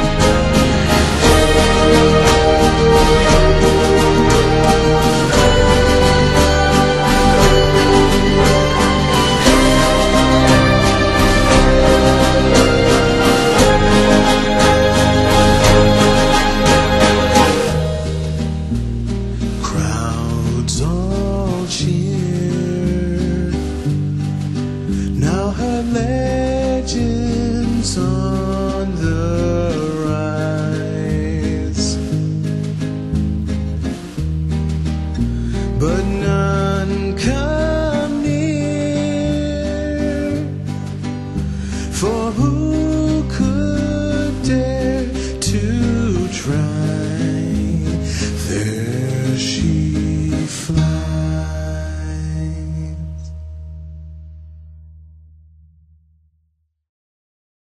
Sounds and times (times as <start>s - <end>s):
Music: 0.0s - 56.6s.